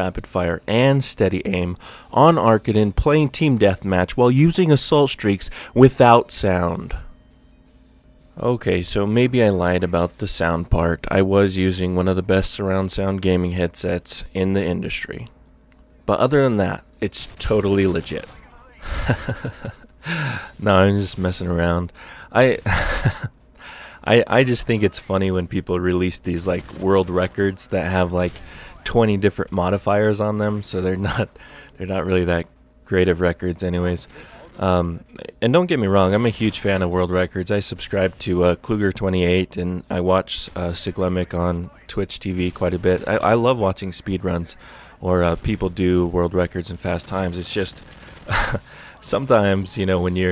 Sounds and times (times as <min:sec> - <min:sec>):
Speech: 0:00.0 - 0:07.1, 0:08.4 - 0:15.3, 0:16.1 - 0:19.4, 0:20.5 - 0:22.8, 0:24.0 - 0:50.3.